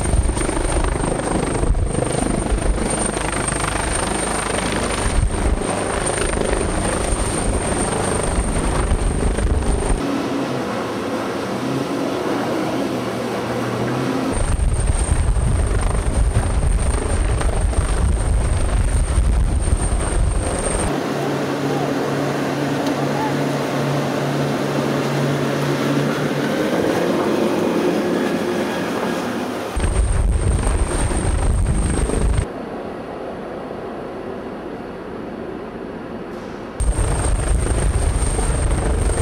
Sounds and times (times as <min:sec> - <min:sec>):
Helicopter: 0:00.0 - 0:32.6, 0:36.8 - 0:39.2.